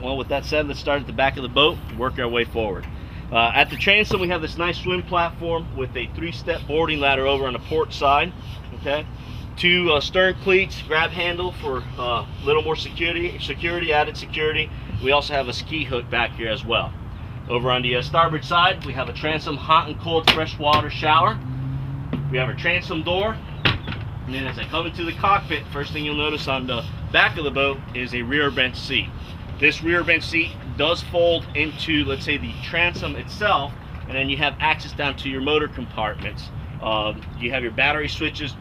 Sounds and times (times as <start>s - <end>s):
Speech: 0.0s - 16.9s, 17.5s - 21.4s, 22.3s - 23.4s, 24.3s - 38.6s
Vehicle: 0.0s - 38.6s.